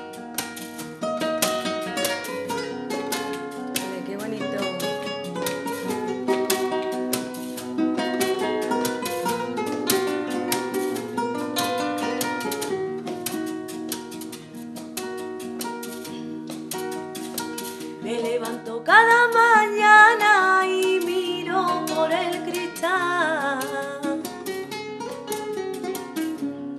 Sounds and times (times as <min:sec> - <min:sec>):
Music: 0:00.0 - 0:26.7.